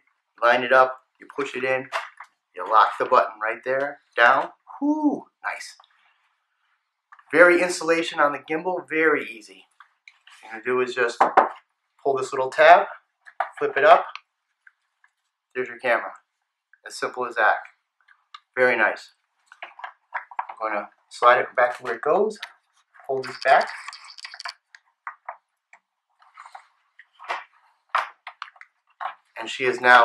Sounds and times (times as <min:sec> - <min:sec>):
Speech: 0:00.4 - 0:02.0, 0:02.6 - 0:05.8, 0:07.4 - 0:09.6, 0:10.4 - 0:11.4, 0:12.0 - 0:14.2, 0:15.6 - 0:16.2, 0:16.9 - 0:17.7, 0:18.4 - 0:19.1, 0:20.5 - 0:22.5, 0:23.1 - 0:24.5, 0:29.4 - 0:30.0.